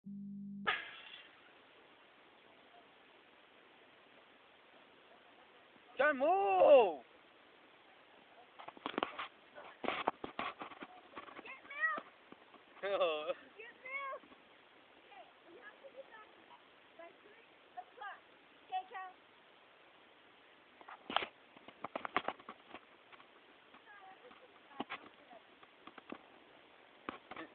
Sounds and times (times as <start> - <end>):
Outside, rural or natural: 0.5 - 27.5.